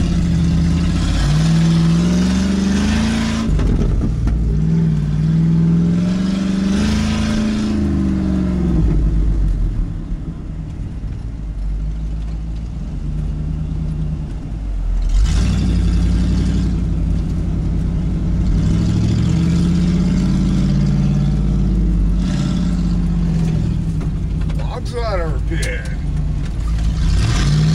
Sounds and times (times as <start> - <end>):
Vehicle: 0.0 - 27.7.